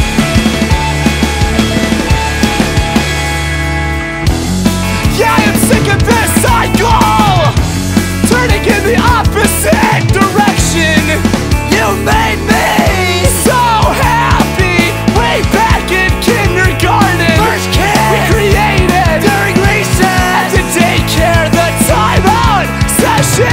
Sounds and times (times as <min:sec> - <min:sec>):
Pop music: 0:00.0 - 0:23.5.